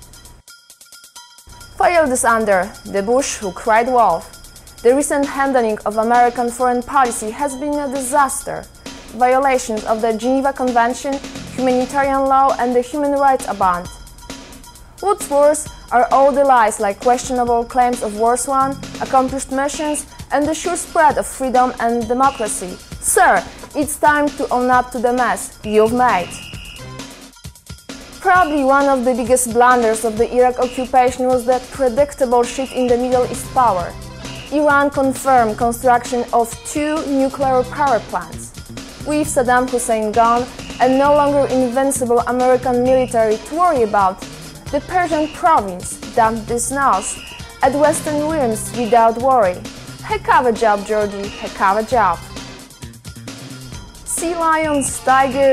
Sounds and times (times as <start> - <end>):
Music: 0.0 - 55.5
Speech: 1.8 - 8.6, 9.2 - 13.9, 15.0 - 26.4, 28.2 - 33.9, 34.5 - 38.5, 39.1 - 52.2, 54.1 - 55.5.